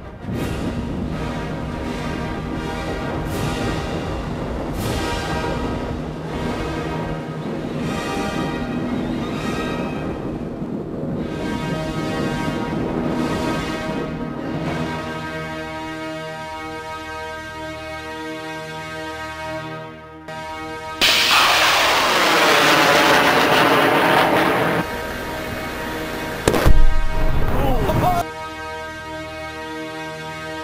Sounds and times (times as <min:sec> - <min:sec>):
Artillery fire: 0:21.0 - 0:28.0.